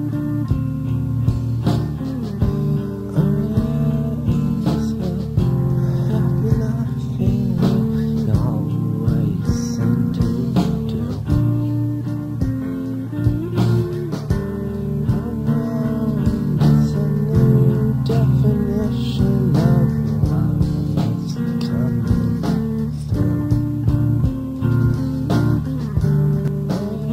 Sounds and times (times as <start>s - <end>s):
Music: 0.0s - 27.1s.